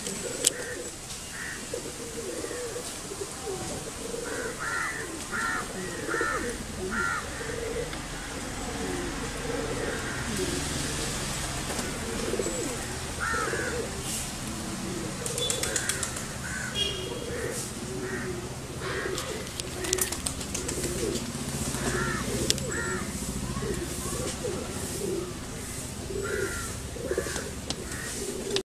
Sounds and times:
Coo: 0.0 - 28.6.

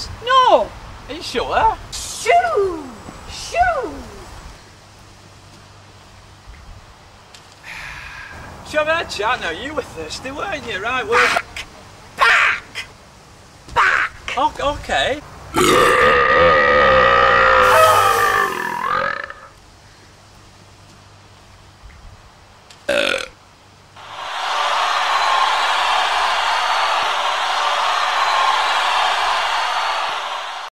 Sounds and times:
Burping, eructation: 15.6 - 19.6, 22.9 - 23.4.

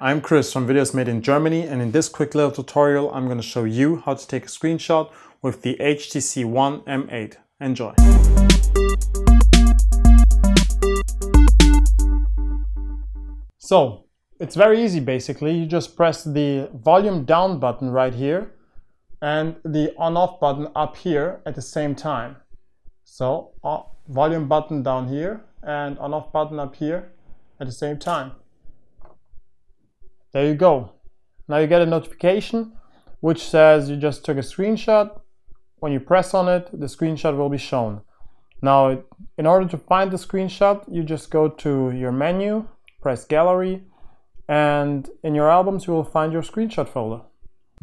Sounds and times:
Synthesizer: 8.0 - 13.5.

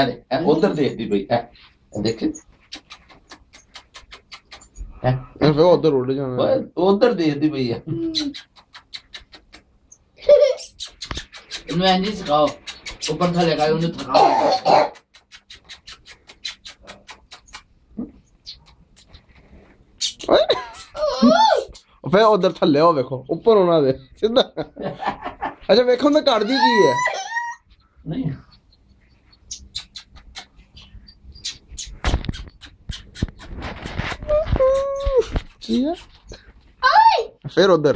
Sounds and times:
Bird: 8.0 - 21.9, 26.1 - 36.5.

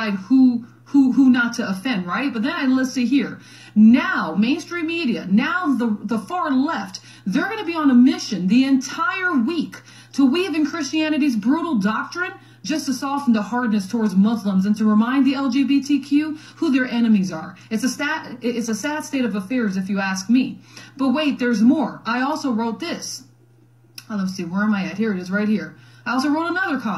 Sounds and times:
Speech: 0.0 - 23.3, 24.0 - 26.9.

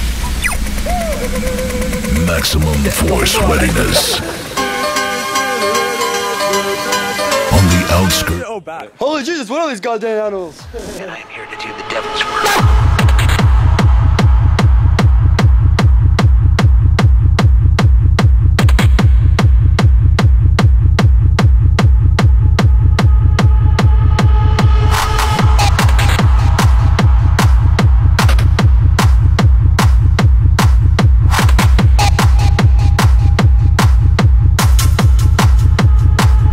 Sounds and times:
Music: 0.0 - 8.5, 10.6 - 36.5
Speech: 2.1 - 4.3, 7.5 - 12.5.

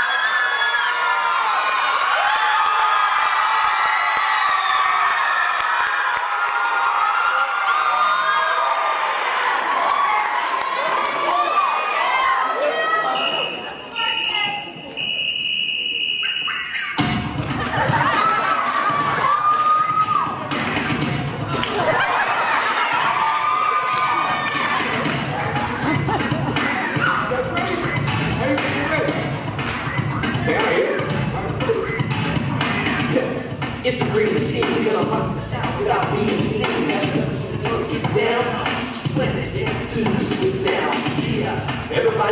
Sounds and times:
Music: 16.8 - 42.3.

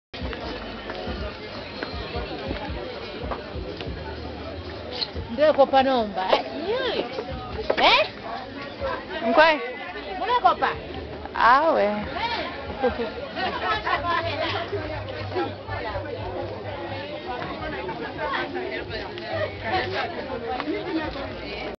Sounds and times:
Inside, public space: 0.1 - 21.7
Music: 0.2 - 21.7.

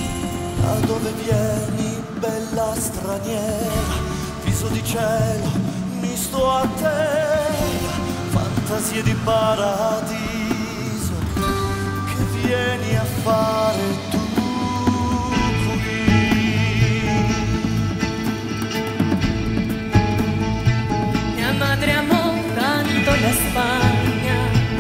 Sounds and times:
Music: 0.0 - 24.8.

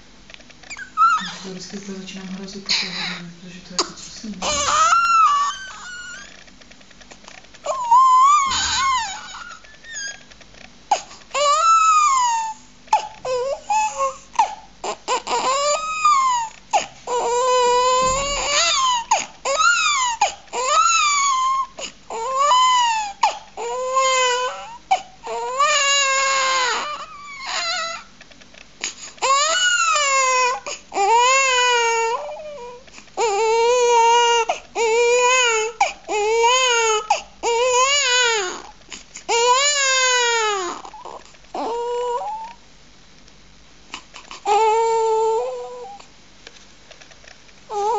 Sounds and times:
Crying, sobbing: 4.4 - 6.3, 7.7 - 10.2, 11.4 - 28.1.

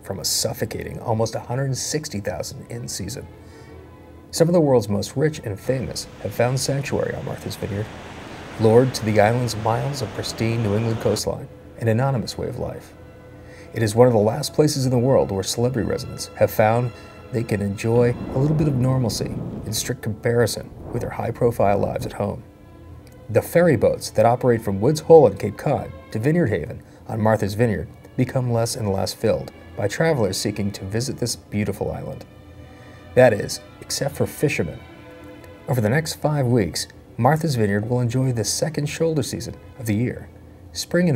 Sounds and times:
Speech: 0.0 - 3.3, 4.3 - 7.9, 8.6 - 13.0, 13.8 - 22.5, 23.3 - 32.3, 33.2 - 34.9, 35.7 - 41.1
Music: 0.0 - 41.1.

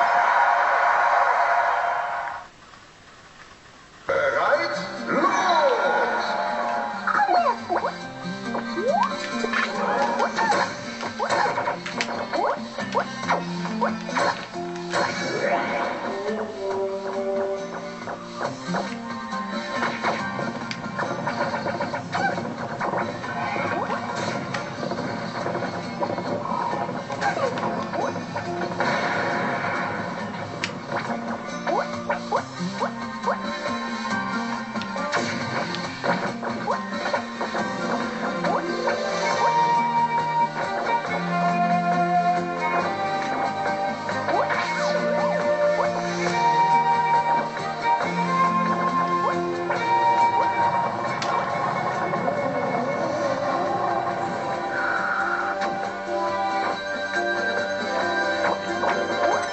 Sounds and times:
Music: 0.0 - 2.5, 4.1 - 59.5
Smash, crash: 13.3 - 16.1, 19.7 - 31.9, 35.0 - 39.6.

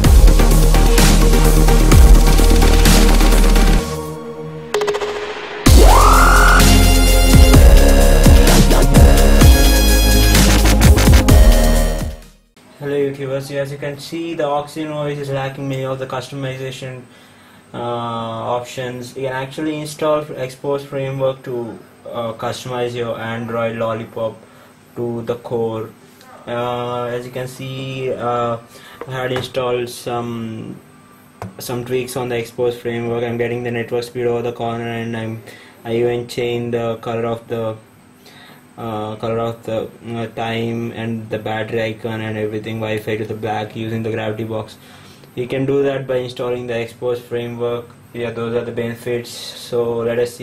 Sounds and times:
Dubstep: 0.0 - 4.2, 4.9 - 12.2.

